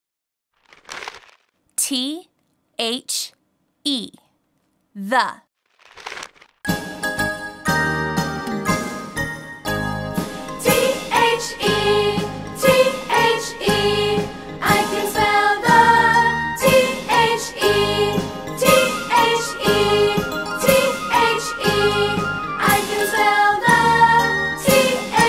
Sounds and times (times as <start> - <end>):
Speech: 1.8 - 4.3, 5.0 - 5.5
Music: 6.7 - 25.2.